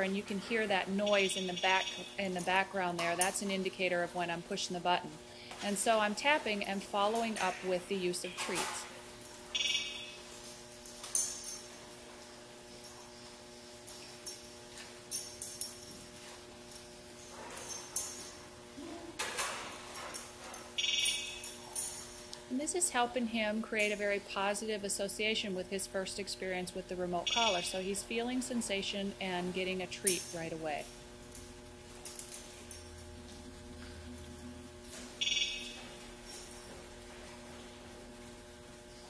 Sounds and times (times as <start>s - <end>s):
Speech: 0.0s - 8.9s, 22.5s - 30.9s.